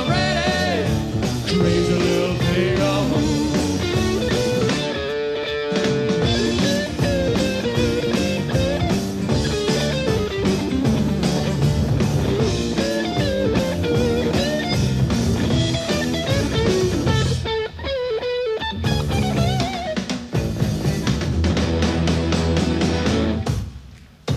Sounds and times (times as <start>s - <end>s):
Singing: 0.0s - 3.8s
Psychedelic rock: 0.0s - 23.8s.